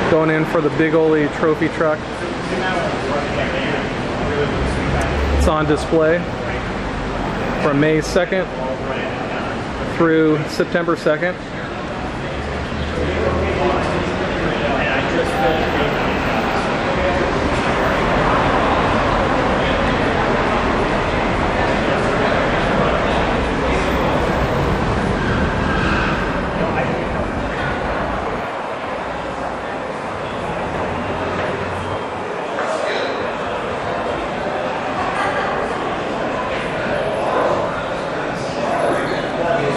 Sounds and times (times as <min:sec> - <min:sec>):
Speech: 0:00.0 - 0:24.8, 0:29.2 - 0:39.7.